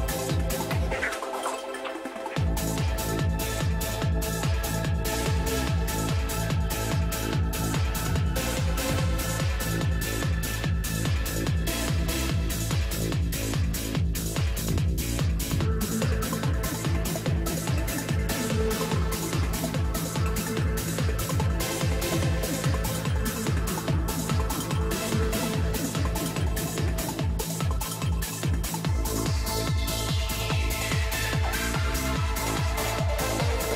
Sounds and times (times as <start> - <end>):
Music: 0.0 - 33.7.